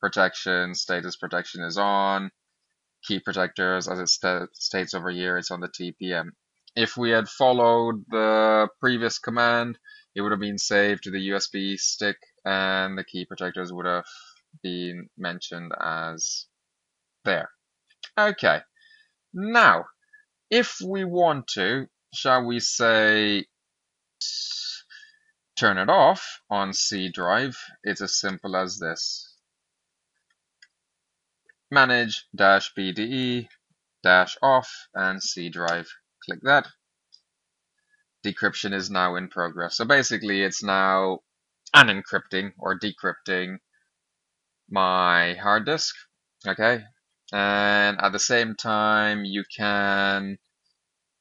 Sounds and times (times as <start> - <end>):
Speech: 0.0 - 2.3, 3.1 - 16.5, 17.3 - 18.6, 19.4 - 19.9, 20.5 - 23.4, 24.2 - 25.0, 25.6 - 29.3, 31.7 - 36.7, 38.3 - 43.6, 44.7 - 50.4.